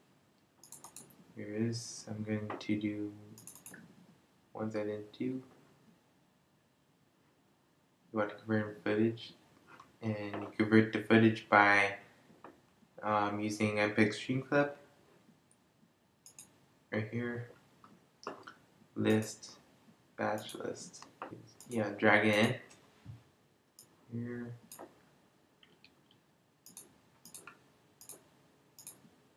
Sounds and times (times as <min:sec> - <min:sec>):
Speech: 0:01.4 - 0:03.3, 0:04.6 - 0:05.5, 0:08.2 - 0:09.4, 0:10.0 - 0:12.0, 0:13.0 - 0:14.8, 0:17.0 - 0:17.6, 0:19.0 - 0:19.6, 0:20.2 - 0:21.1, 0:21.7 - 0:22.7, 0:24.1 - 0:24.6.